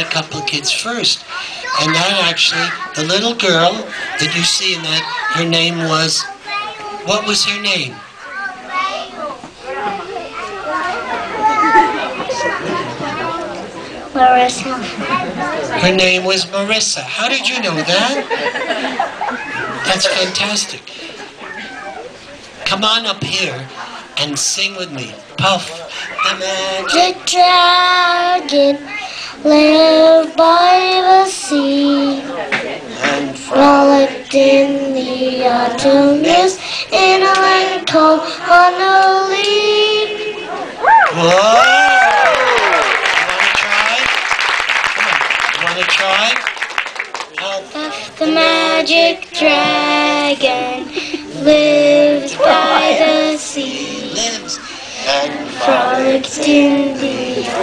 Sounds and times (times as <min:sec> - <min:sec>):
Child singing: 0:26.3 - 0:32.3, 0:33.0 - 0:40.5, 0:47.5 - 0:57.6.